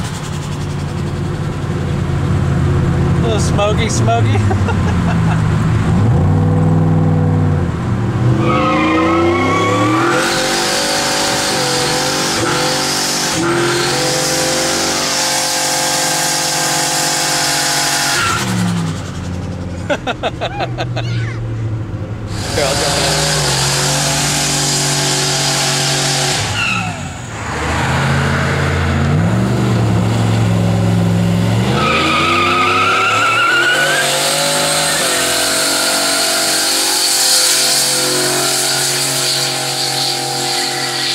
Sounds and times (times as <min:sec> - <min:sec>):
Car: 0:00.0 - 0:41.1
Speech: 0:03.2 - 0:04.5, 0:22.5 - 0:23.2.